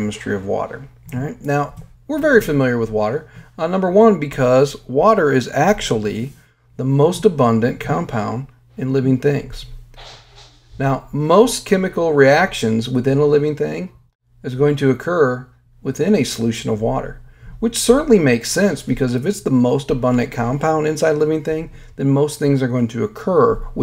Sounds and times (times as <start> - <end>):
Speech: 0.0 - 9.8, 10.8 - 23.8.